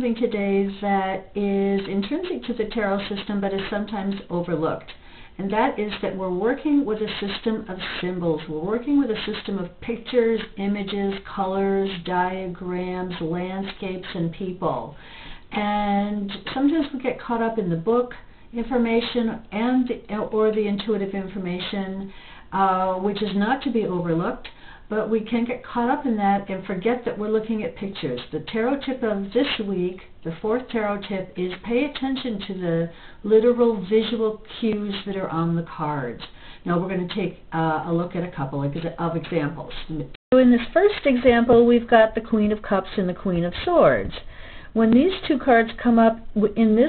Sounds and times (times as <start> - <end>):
Speech: 0.0 - 46.8.